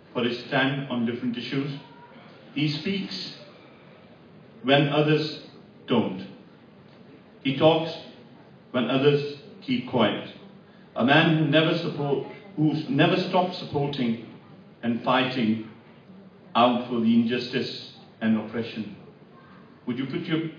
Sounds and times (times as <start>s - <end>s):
Male speech, man speaking: 0.0s - 3.5s, 4.6s - 6.4s, 7.4s - 10.4s, 11.0s - 15.8s, 16.6s - 19.1s, 19.9s - 20.5s
Narration, monologue: 0.0s - 20.5s.